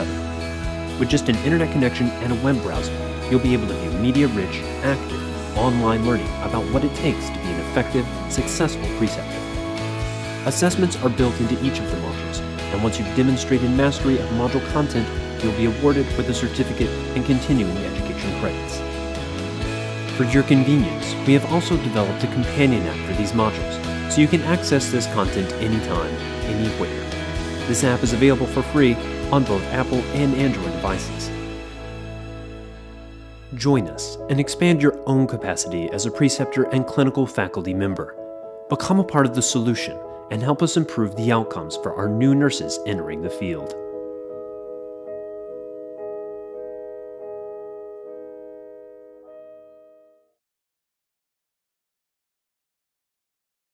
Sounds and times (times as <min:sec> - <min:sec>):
Piano: 0:00.0 - 0:50.4.